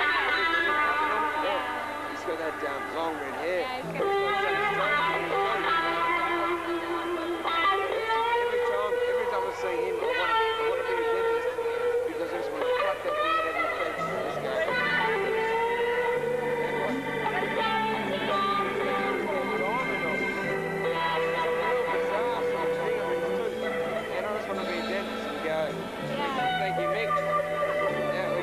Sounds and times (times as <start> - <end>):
Speech: 0.0 - 14.9, 16.7 - 20.5, 21.6 - 27.2, 27.8 - 28.4
Music: 0.0 - 28.4.